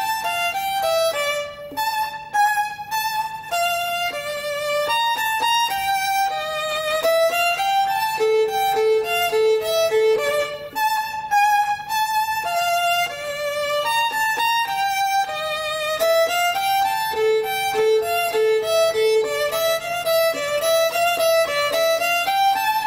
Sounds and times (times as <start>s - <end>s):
Violin, fiddle: 0.0s - 22.8s.